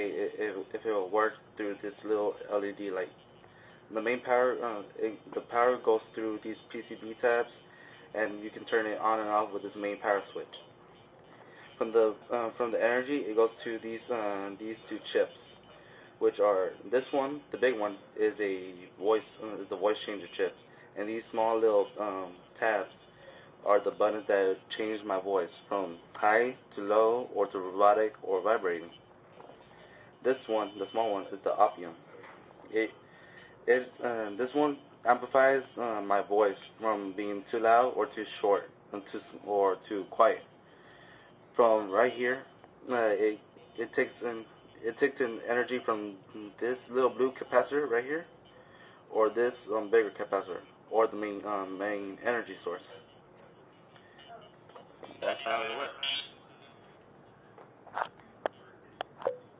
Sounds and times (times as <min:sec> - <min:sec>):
Speech: 0:00.0 - 0:10.8, 0:11.6 - 0:33.0, 0:33.6 - 0:40.5, 0:41.6 - 0:53.1, 0:54.2 - 0:56.8
Inside, small room: 0:00.0 - 0:59.5.